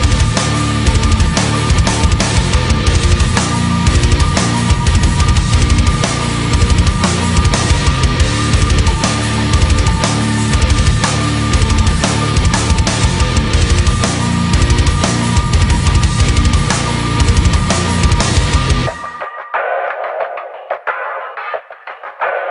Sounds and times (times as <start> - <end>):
Soundtrack music: 0.0 - 22.5.